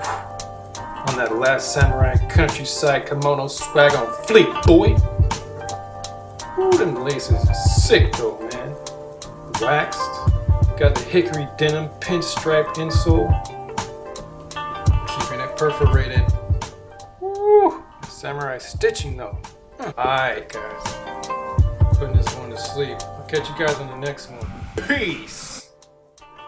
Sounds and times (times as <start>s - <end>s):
Music: 0.0s - 26.4s
Speech: 1.0s - 5.0s, 6.6s - 8.8s, 9.5s - 13.4s, 15.0s - 16.4s, 17.2s - 21.0s, 22.0s - 25.7s.